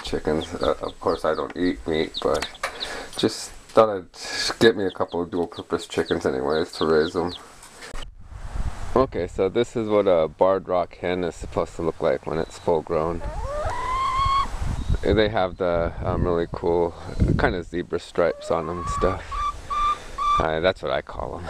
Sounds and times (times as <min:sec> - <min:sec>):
Speech: 0:00.0 - 0:02.5, 0:03.2 - 0:07.4, 0:09.0 - 0:13.2, 0:15.0 - 0:19.3, 0:20.4 - 0:21.5
Chicken, rooster: 0:13.2 - 0:14.5, 0:18.2 - 0:20.5.